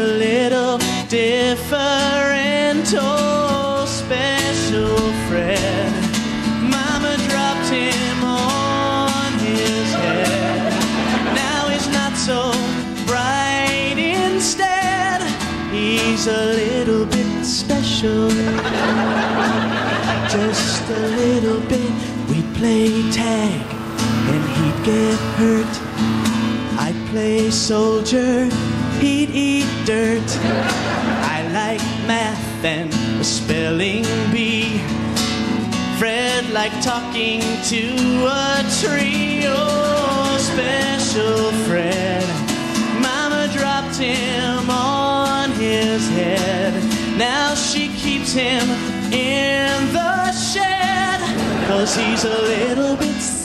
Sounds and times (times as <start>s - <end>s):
Music: 0.0s - 53.4s.